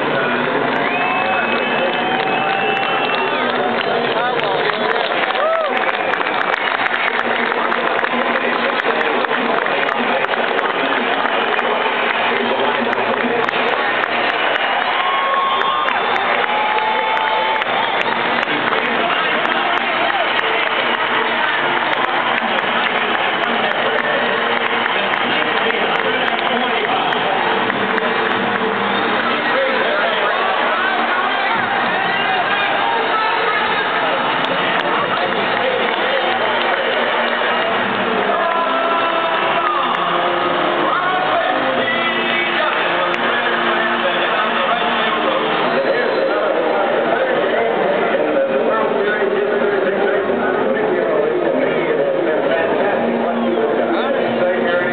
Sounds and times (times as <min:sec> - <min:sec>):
Male speech, man speaking: 0:25.0 - 0:28.2, 0:29.2 - 0:37.2, 0:40.8 - 0:54.9.